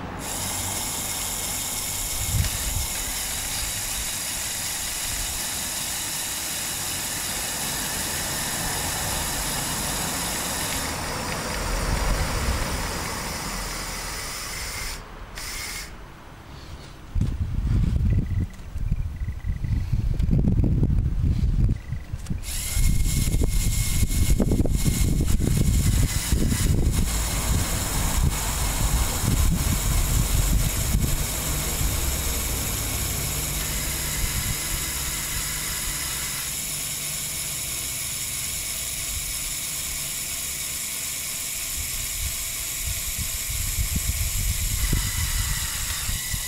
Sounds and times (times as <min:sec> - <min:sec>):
Engine: 0:00.0 - 0:46.4
Vehicle: 0:00.0 - 0:46.4.